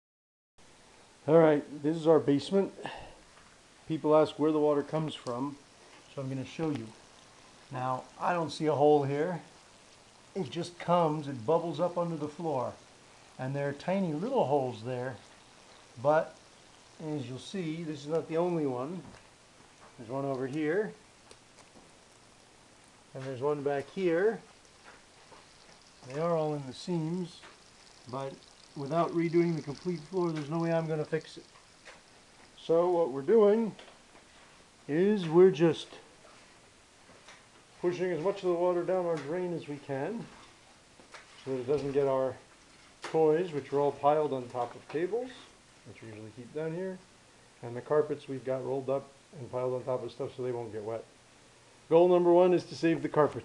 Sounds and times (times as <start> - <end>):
Speech: 1.2 - 3.1, 3.9 - 7.0, 7.7 - 9.5, 10.4 - 12.8, 13.4 - 15.2, 16.0 - 16.4, 17.0 - 19.2, 20.0 - 21.0, 23.1 - 24.5, 26.0 - 27.5, 28.1 - 31.5, 32.6 - 33.8, 34.9 - 36.1, 37.8 - 40.4, 41.4 - 42.4, 43.1 - 51.2, 51.9 - 53.4.